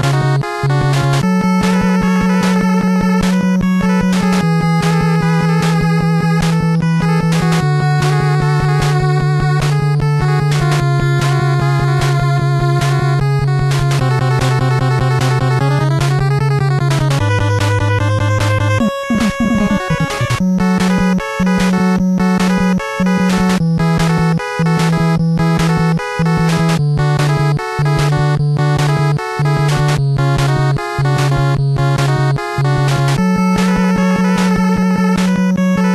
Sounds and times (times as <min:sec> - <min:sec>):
Music: 0:00.0 - 0:35.9.